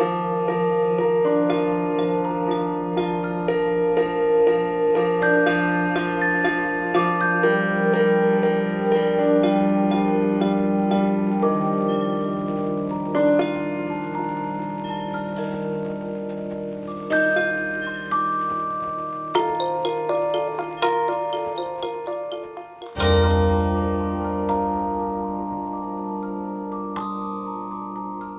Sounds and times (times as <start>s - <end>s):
Vibraphone: 10.0s - 28.3s.